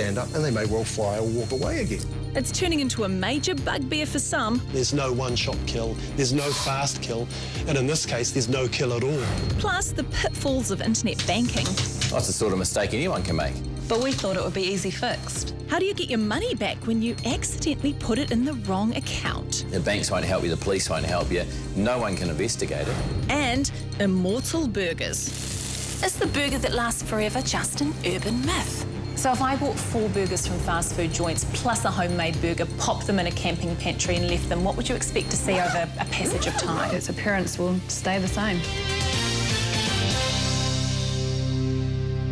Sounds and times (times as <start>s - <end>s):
Music: 0.0s - 42.3s.